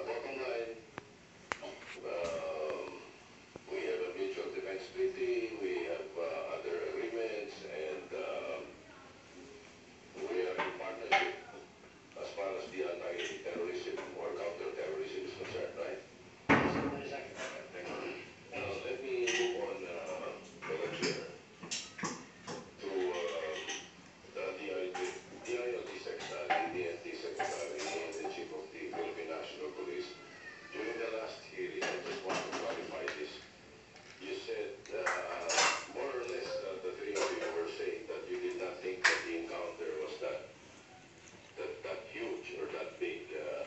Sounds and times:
Speech: 0.0s - 0.9s, 1.6s - 3.1s, 3.7s - 9.2s, 10.2s - 21.4s, 22.6s - 33.5s, 34.1s - 40.5s, 41.5s - 43.6s.

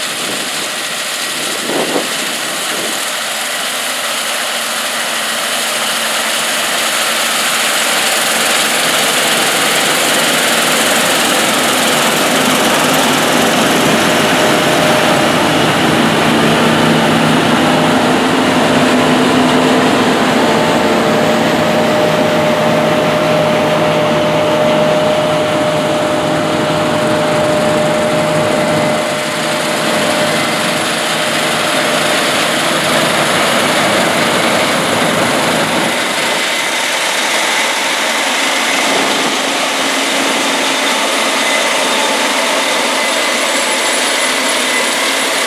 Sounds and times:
Engine: 0.0s - 45.4s
Outside, rural or natural: 0.0s - 45.4s
Vehicle: 0.0s - 45.4s.

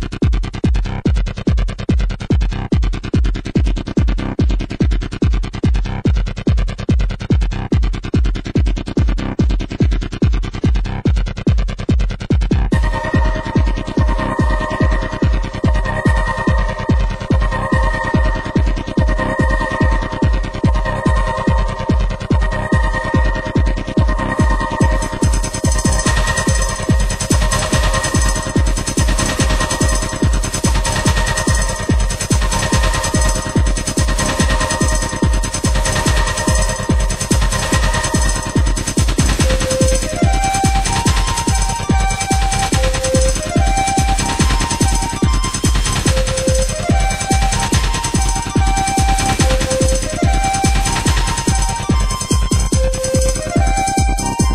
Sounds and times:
Music: 0.0s - 54.5s
Sound effect: 12.7s - 54.5s.

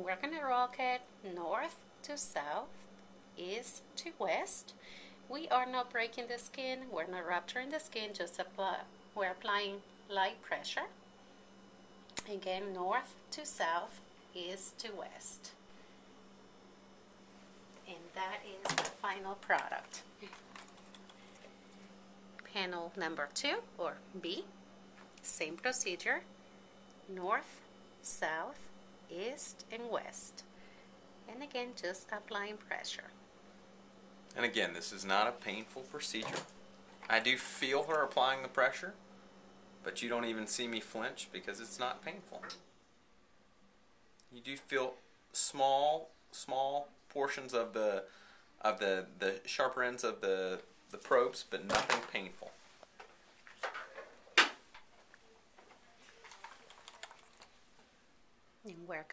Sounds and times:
Inside, small room: 0.0s - 59.1s
Speech: 3.4s - 4.7s, 22.5s - 24.5s, 31.3s - 33.1s, 44.3s - 52.6s, 58.7s - 59.1s.

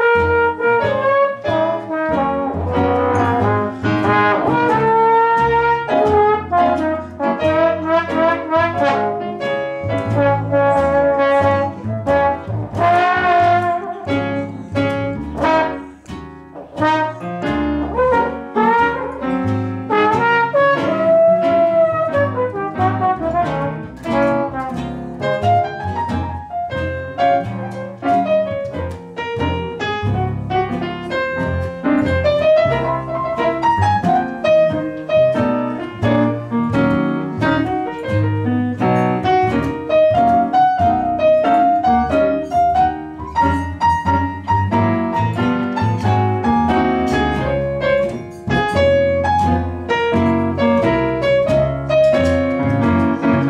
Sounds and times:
Jazz: 0.0s - 53.4s
Trombone: 0.0s - 53.4s.

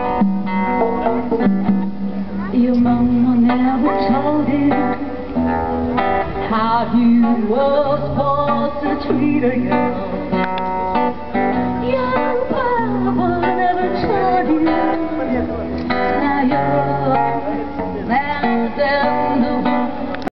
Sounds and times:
Music: 0.0s - 20.3s.

